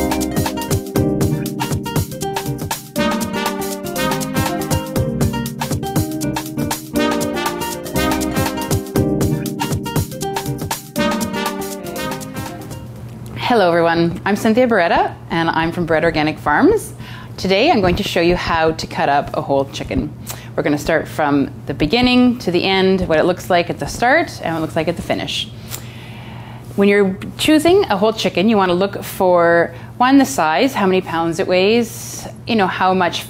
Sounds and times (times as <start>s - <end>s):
Speech: 13.4s - 25.5s, 26.8s - 33.2s.